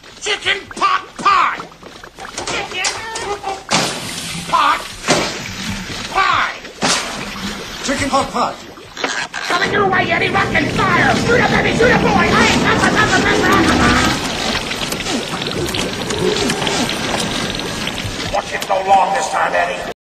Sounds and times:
Speech: 0:09.5 - 0:14.2, 0:18.3 - 0:20.0.

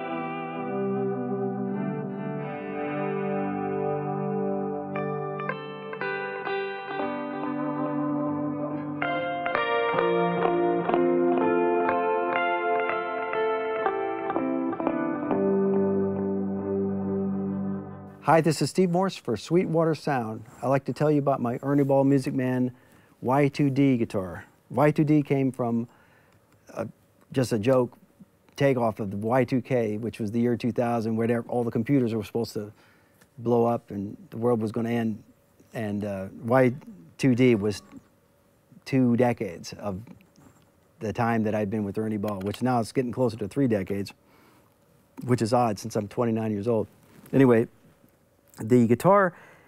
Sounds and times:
Speech: 0:18.2 - 0:25.9, 0:26.7 - 0:28.0, 0:28.6 - 0:32.8, 0:33.4 - 0:38.0, 0:38.8 - 0:40.2, 0:41.0 - 0:44.2, 0:45.2 - 0:47.7, 0:48.6 - 0:49.4.

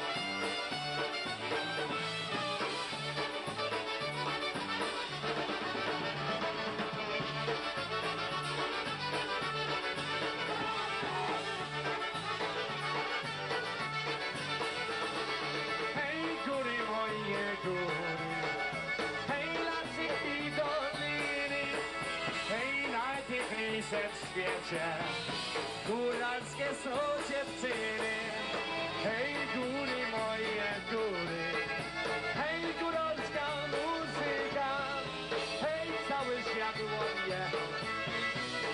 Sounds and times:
Violin, fiddle: 0:00.0 - 0:22.6, 0:28.0 - 0:38.7.

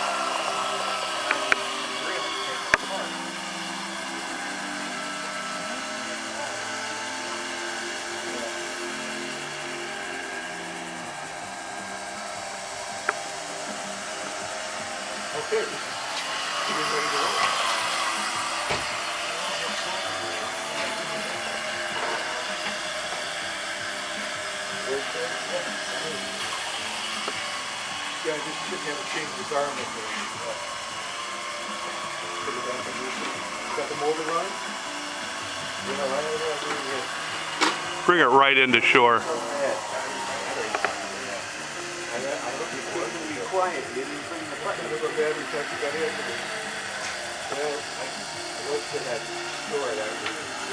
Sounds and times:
Music: 0:00.0 - 0:50.7
Speech: 0:16.7 - 0:17.4, 0:28.2 - 0:30.6, 0:32.4 - 0:34.6, 0:35.8 - 0:37.1, 0:38.0 - 0:41.5, 0:42.1 - 0:46.5, 0:47.5 - 0:50.7.

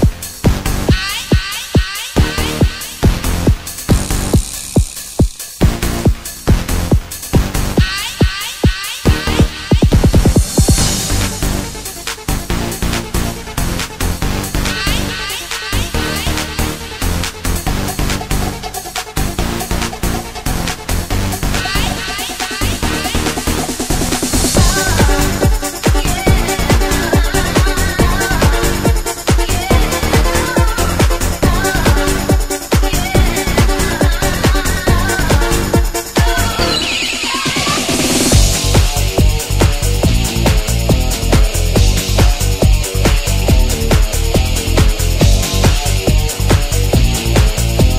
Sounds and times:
Music: 0:00.0 - 0:47.9.

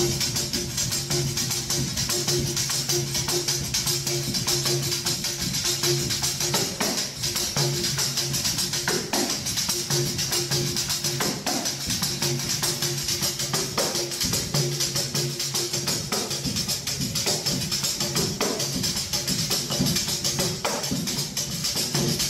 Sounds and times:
Inside, large room or hall: 0:00.0 - 0:22.3
Music: 0:00.0 - 0:22.3.

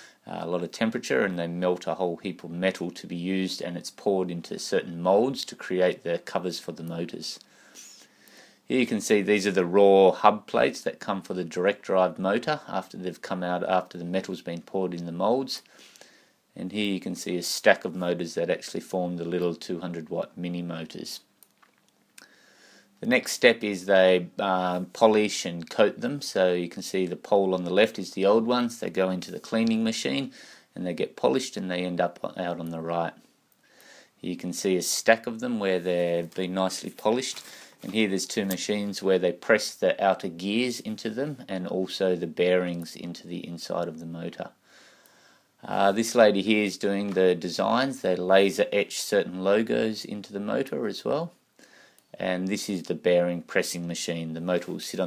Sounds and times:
Speech: 0:00.0 - 0:07.5, 0:08.7 - 0:15.7, 0:16.5 - 0:21.3, 0:23.0 - 0:33.3, 0:34.2 - 0:44.6, 0:45.6 - 0:51.4, 0:52.1 - 0:55.0.

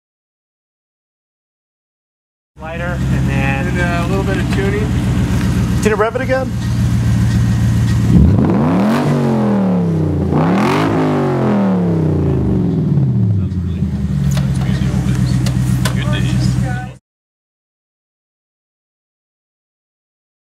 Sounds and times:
Speech: 0:02.6 - 0:04.9, 0:05.8 - 0:06.6, 0:13.4 - 0:17.0
Car: 0:02.6 - 0:17.0
Accelerating, revving, vroom: 0:08.0 - 0:13.4.

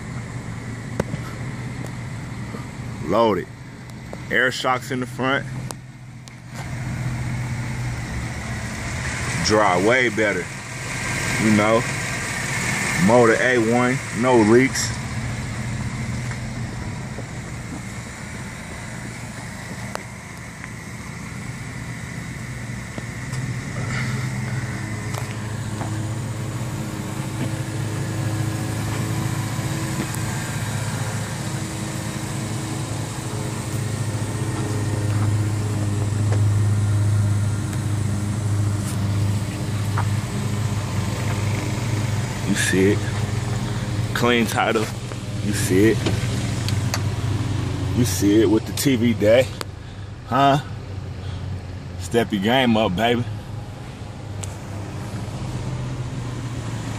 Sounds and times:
Truck: 0:00.0 - 0:56.9
Speech: 0:03.0 - 0:03.5, 0:04.3 - 0:05.5, 0:09.4 - 0:10.5, 0:11.4 - 0:11.9, 0:13.0 - 0:15.0, 0:42.5 - 0:43.2, 0:44.2 - 0:46.1, 0:48.0 - 0:49.6, 0:50.3 - 0:50.7, 0:52.0 - 0:53.4.

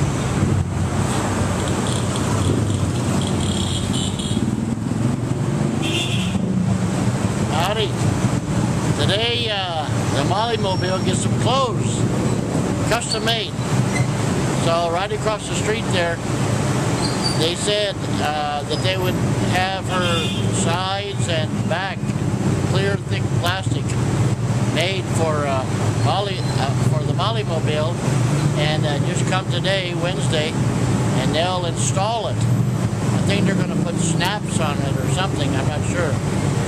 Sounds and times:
Speech: 0:07.5 - 0:08.0, 0:09.0 - 0:12.0, 0:12.9 - 0:13.5, 0:14.6 - 0:16.2, 0:17.4 - 0:22.1, 0:22.7 - 0:24.0, 0:24.8 - 0:28.0, 0:28.6 - 0:30.6, 0:31.2 - 0:32.4, 0:33.2 - 0:36.2.

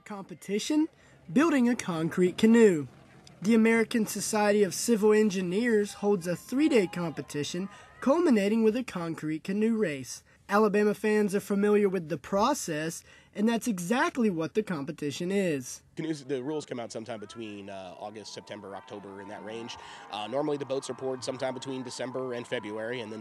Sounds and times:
Speech: 0:00.0 - 0:23.2.

